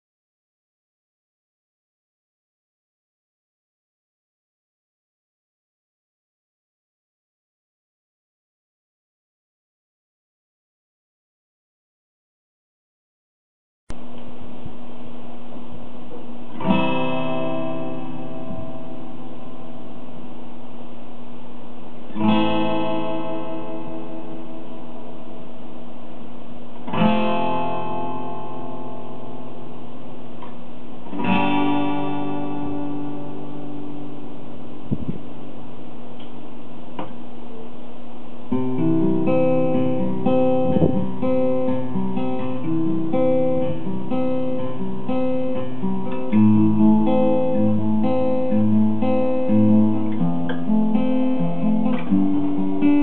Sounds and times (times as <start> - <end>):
Strum: 15.5 - 21.2, 21.8 - 35.4, 38.5 - 53.0.